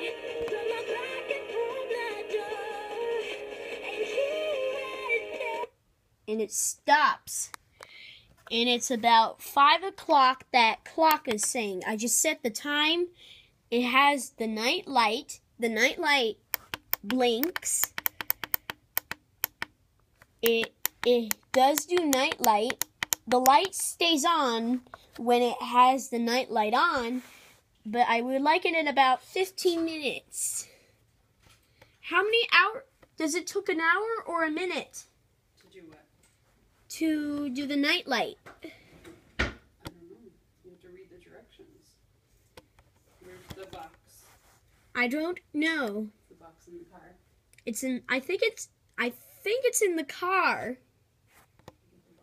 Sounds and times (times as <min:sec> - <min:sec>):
Music: 0:00.0 - 0:05.7
Speech: 0:06.3 - 0:07.6, 0:08.5 - 0:13.1, 0:20.4 - 0:27.2, 0:43.2 - 0:44.4, 0:45.0 - 0:50.8.